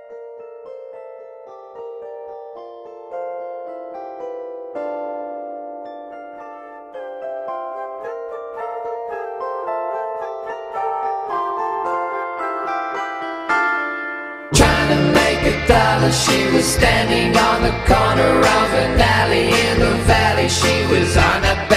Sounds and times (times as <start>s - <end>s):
Music: 0.0s - 21.7s.